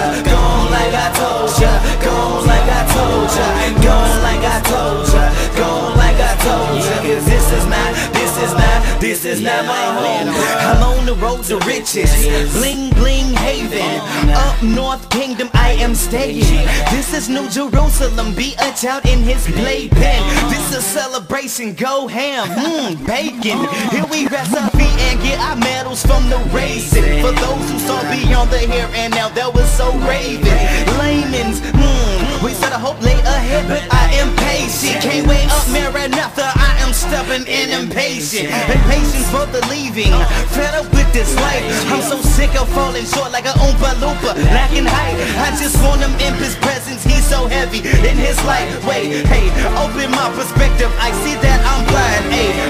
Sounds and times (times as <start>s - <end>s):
Music: 0.0s - 52.6s.